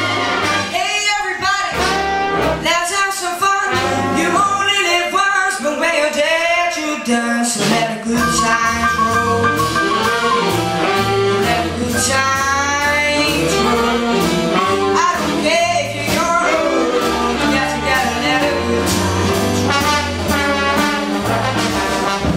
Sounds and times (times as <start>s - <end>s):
Jazz: 0.0s - 22.3s.